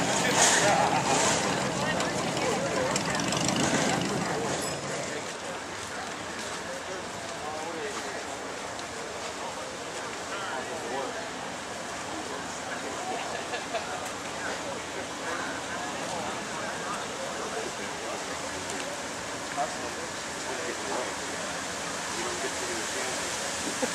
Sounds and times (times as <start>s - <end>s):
Speech: 0.0s - 23.9s
Vehicle: 0.0s - 23.9s.